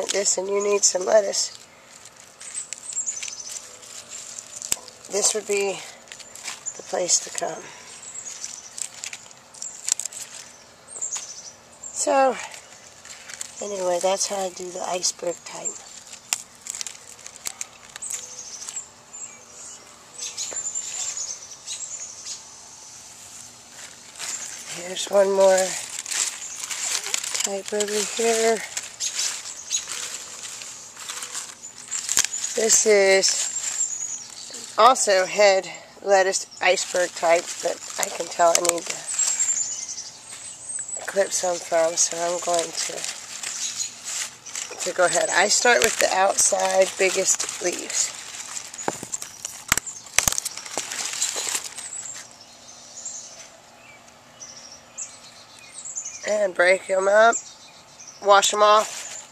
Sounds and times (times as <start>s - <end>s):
Speech: 0.0s - 1.6s, 5.1s - 5.9s, 6.8s - 7.8s, 12.0s - 12.5s, 13.6s - 15.8s, 24.7s - 25.8s, 27.4s - 28.7s, 32.6s - 33.4s, 34.5s - 39.1s, 41.0s - 43.1s, 44.7s - 48.1s, 56.3s - 57.4s, 58.2s - 59.0s.